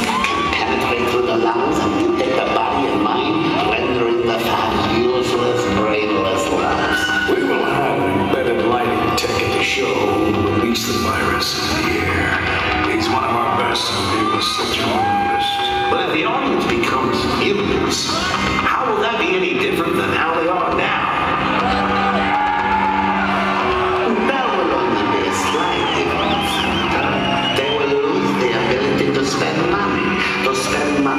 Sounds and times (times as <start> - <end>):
Speech: 0.0 - 21.4, 24.0 - 31.1
Cheering: 0.0 - 31.1
Music: 0.0 - 31.1.